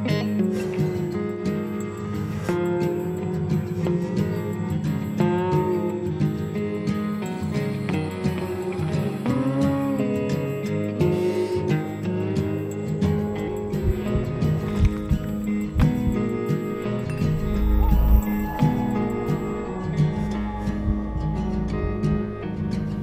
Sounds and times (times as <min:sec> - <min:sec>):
Soundtrack music: 0:13.4 - 0:22.6.